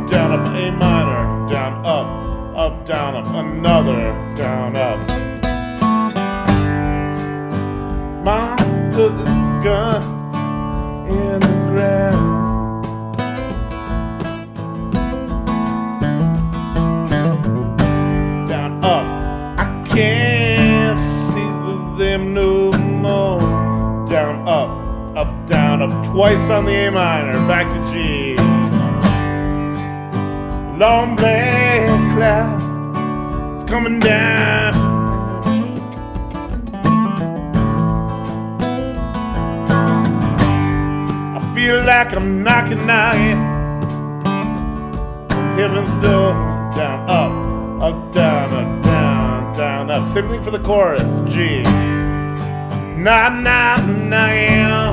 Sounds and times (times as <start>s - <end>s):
Guitar: 0.0s - 54.9s.